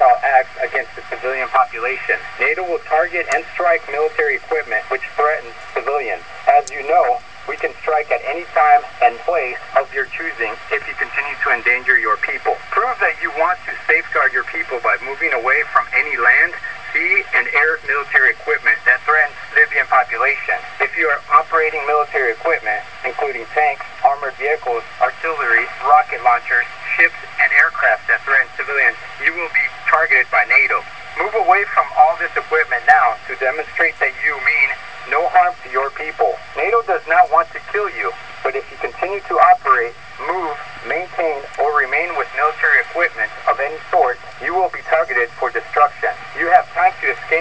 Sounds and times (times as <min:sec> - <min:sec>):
Speech: 0:00.0 - 0:47.4.